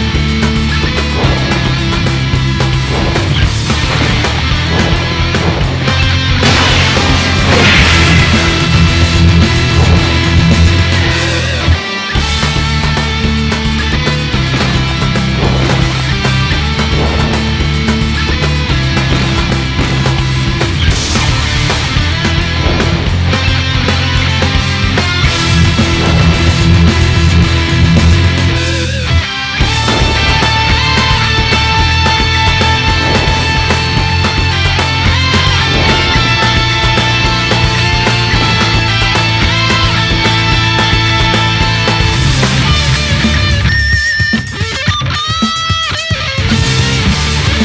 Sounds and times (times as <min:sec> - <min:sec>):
Music: 0:00.0 - 0:47.6.